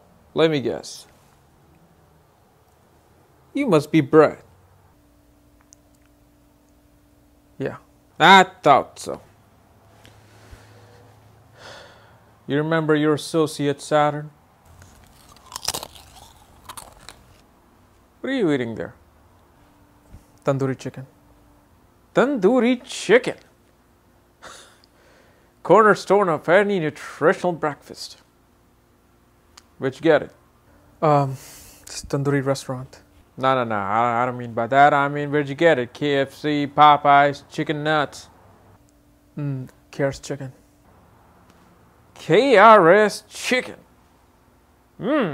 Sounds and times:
Speech: 0:00.3 - 0:01.1, 0:03.5 - 0:04.5, 0:07.6 - 0:09.3, 0:12.5 - 0:14.4, 0:18.2 - 0:19.0, 0:20.4 - 0:21.1, 0:22.1 - 0:23.5, 0:25.6 - 0:28.3, 0:29.8 - 0:30.4, 0:31.0 - 0:38.3, 0:39.4 - 0:40.6, 0:42.2 - 0:43.9, 0:45.0 - 0:45.3.

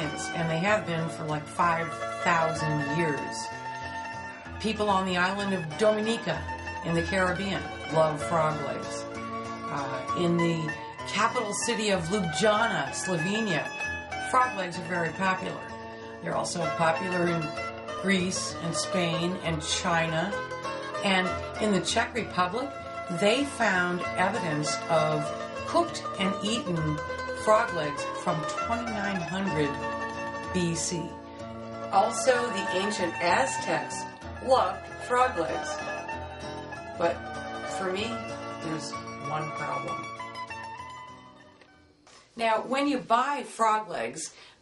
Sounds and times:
Speech: 0:00.0 - 0:03.5, 0:04.6 - 0:09.0, 0:09.7 - 0:13.7, 0:14.3 - 0:20.4, 0:21.0 - 0:29.8, 0:30.6 - 0:31.1, 0:31.9 - 0:35.8, 0:37.0 - 0:40.0, 0:42.4 - 0:44.4
Music: 0:00.0 - 0:44.6.

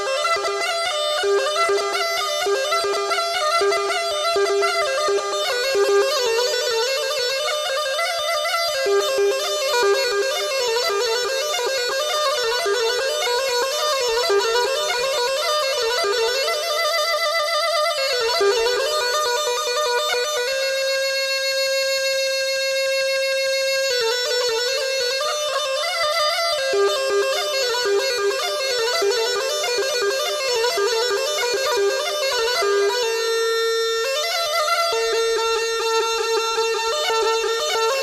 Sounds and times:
Music: 0:00.0 - 0:38.0.

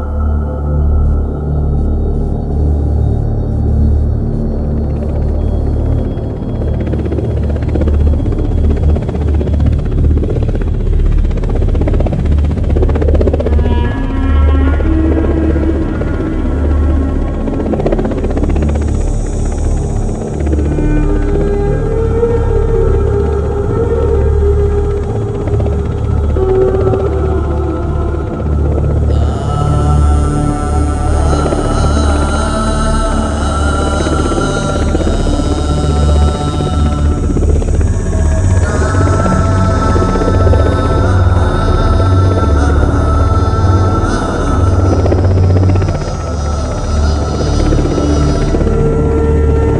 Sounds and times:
Music: 0:00.0 - 0:49.7.

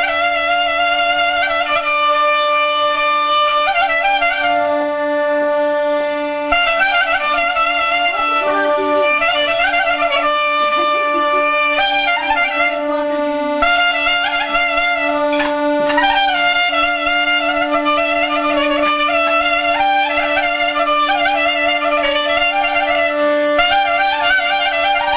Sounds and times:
Clarinet: 0:00.0 - 0:25.1
Speech: 0:07.9 - 0:13.4.

